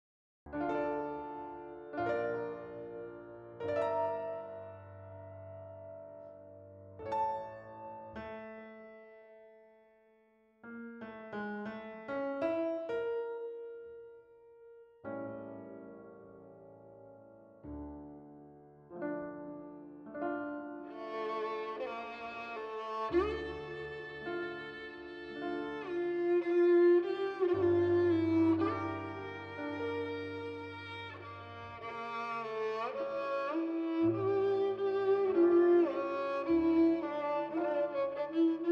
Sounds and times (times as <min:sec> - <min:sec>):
Violin, fiddle: 0:00.5 - 0:05.0, 0:20.8 - 0:38.7.